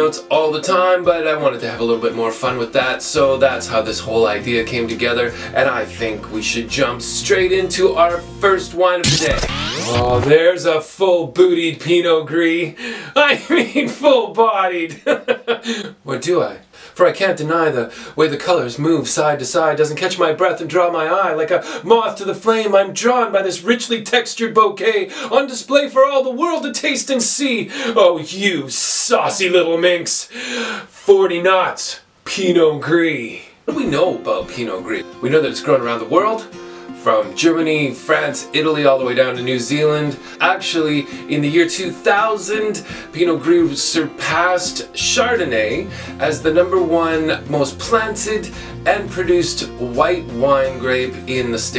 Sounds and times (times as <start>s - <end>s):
Speech: 0.0s - 51.7s.